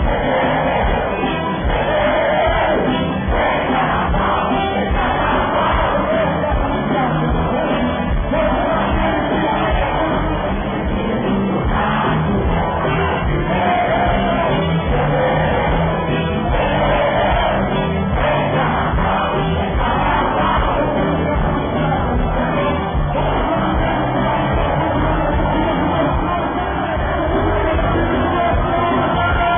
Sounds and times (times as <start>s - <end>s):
Music of Latin America: 0.0s - 29.5s.